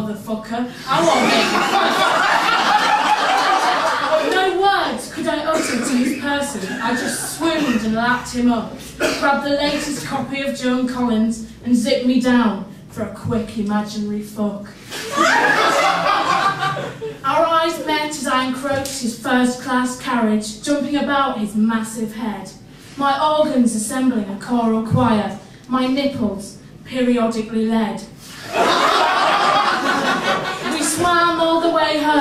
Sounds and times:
Speech: 0.0 - 1.8, 4.2 - 14.8, 17.2 - 28.1, 30.7 - 32.2.

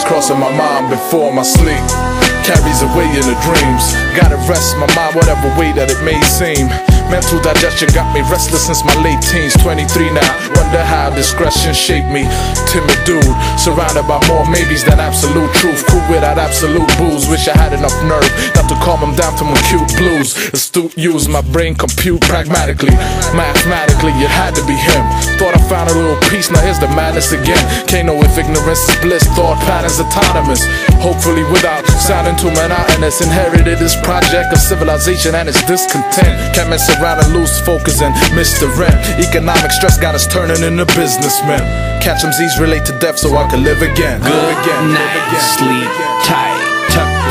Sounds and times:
Music: 0.0 - 47.3.

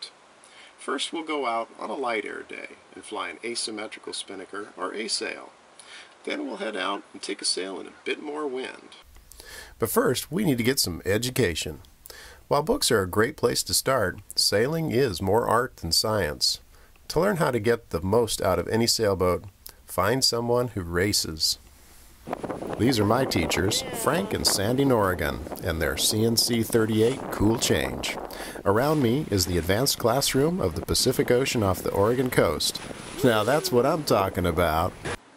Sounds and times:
Speech: 0.8 - 5.5, 6.2 - 9.0, 9.8 - 11.9, 12.5 - 21.6, 22.8 - 35.0.

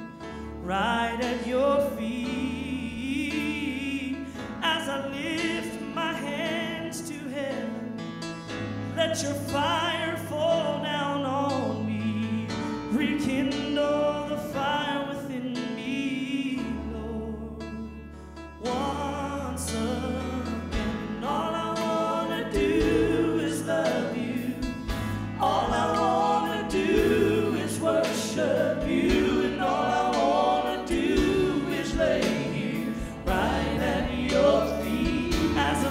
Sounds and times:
Music: 0.0 - 35.9.

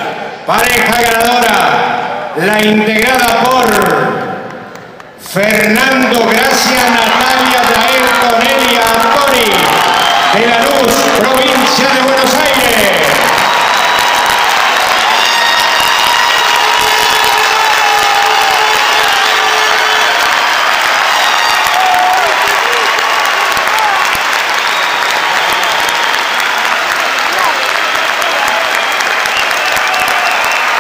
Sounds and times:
Speech: 0.5 - 4.2, 5.3 - 13.2.

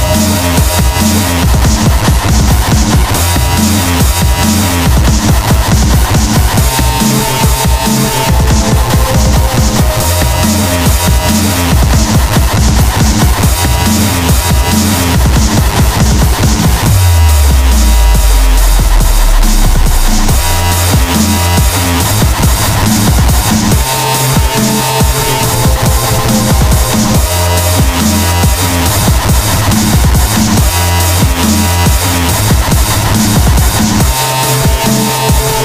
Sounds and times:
Dubstep: 0.0 - 35.6.

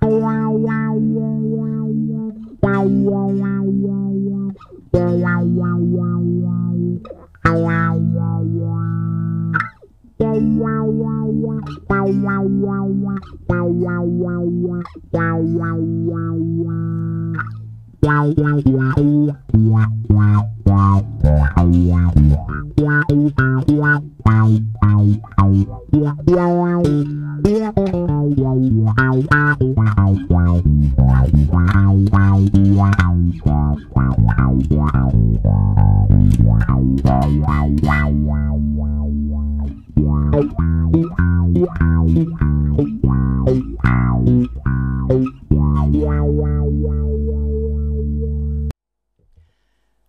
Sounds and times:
Bass guitar: 0.0 - 48.8
Inside, small room: 0.0 - 50.0.

